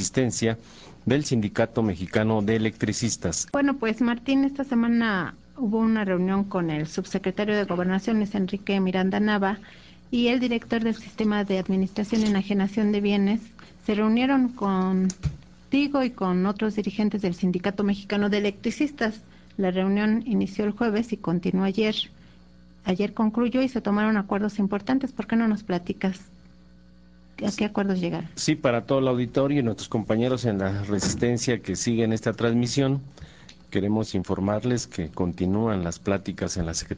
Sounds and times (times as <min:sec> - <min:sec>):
Speech: 0:00.0 - 0:09.6, 0:10.2 - 0:15.2, 0:27.4 - 0:33.1, 0:33.7 - 0:36.9.